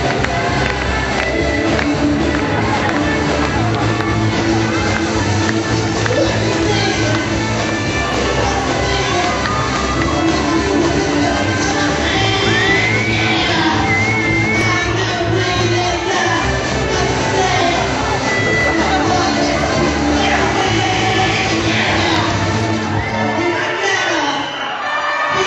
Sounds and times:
Inside, large room or hall: 0:00.0 - 0:25.4
Music: 0:00.0 - 0:25.4
Singing: 0:00.0 - 0:25.4
Shout: 0:06.0 - 0:25.4.

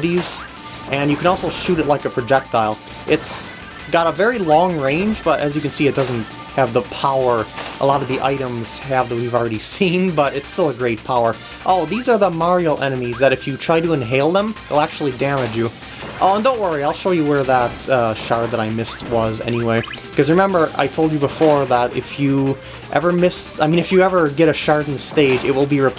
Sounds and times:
Music: 0:00.0 - 0:25.9
Speech: 0:00.0 - 0:25.9.

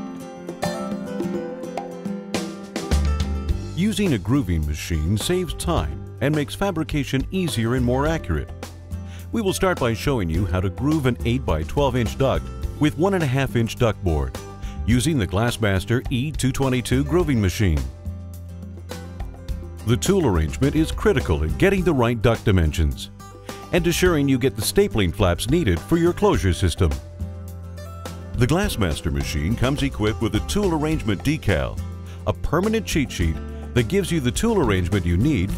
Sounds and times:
Music: 0:00.0 - 0:35.5
Speech: 0:03.8 - 0:08.5, 0:09.3 - 0:18.0, 0:19.8 - 0:23.1, 0:23.7 - 0:27.0, 0:28.4 - 0:35.5.

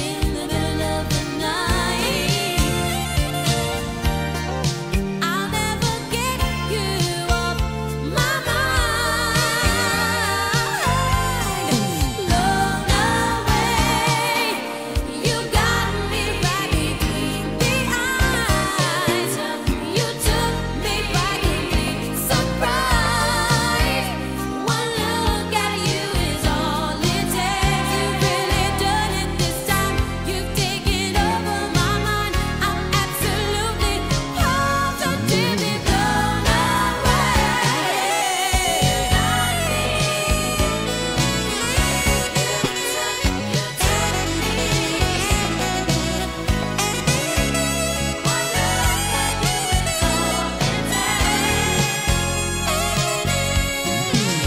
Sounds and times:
Soul music: 0:00.0 - 0:54.4.

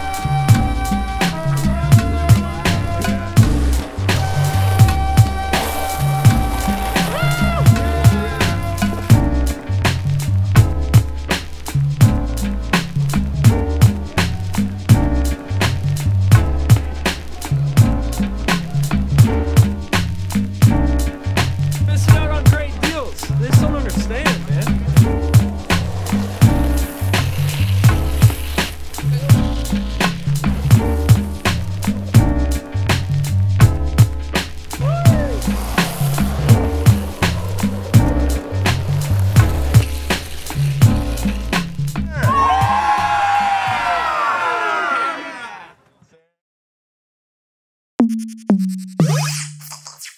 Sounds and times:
Skateboard: 0:00.0 - 0:09.3, 0:24.3 - 0:33.1, 0:34.4 - 0:43.2
Music: 0:00.0 - 0:44.9, 0:48.0 - 0:50.1
Outside, urban or manmade: 0:00.0 - 0:46.2.

